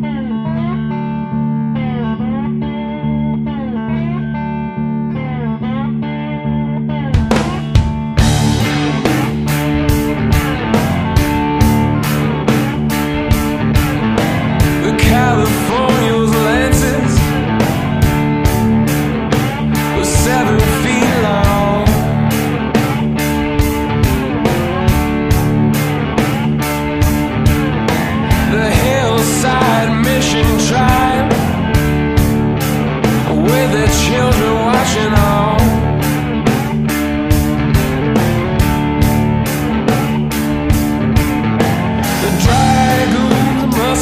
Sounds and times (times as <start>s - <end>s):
Soundtrack music: 7.1s - 44.0s.